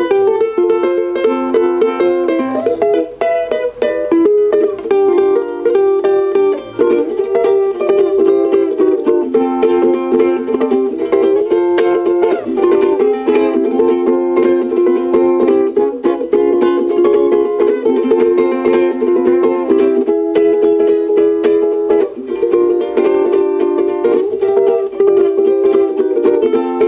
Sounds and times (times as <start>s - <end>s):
Guitar: 0.0s - 26.8s
Inside, small room: 0.0s - 26.8s
Ukulele: 0.0s - 26.8s.